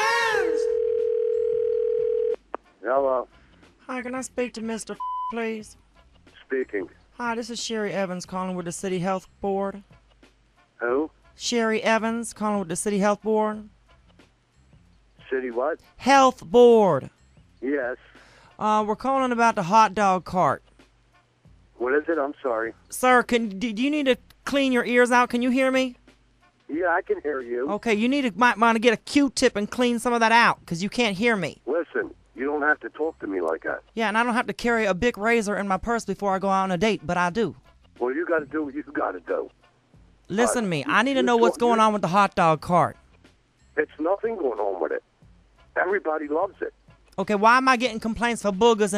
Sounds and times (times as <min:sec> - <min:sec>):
Music: 0:02.2 - 0:48.9
Speech: 0:06.4 - 0:09.8, 0:10.8 - 0:13.7, 0:15.3 - 0:17.1, 0:18.6 - 0:20.6, 0:21.8 - 0:26.0, 0:26.7 - 0:39.5, 0:40.3 - 0:43.0, 0:43.8 - 0:45.0, 0:45.8 - 0:48.9.